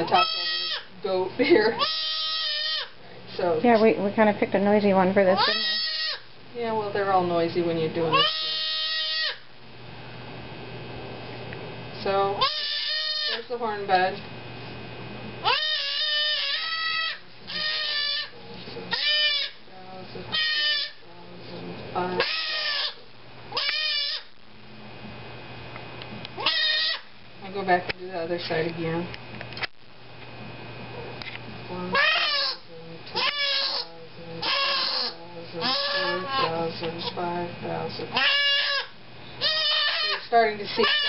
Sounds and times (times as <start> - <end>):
Speech: 0.0 - 1.8, 3.1 - 5.8, 6.6 - 8.6, 12.0 - 12.4, 13.3 - 14.2, 17.5 - 19.0, 19.7 - 22.3, 27.4 - 29.1, 30.9 - 38.2, 40.0 - 41.0.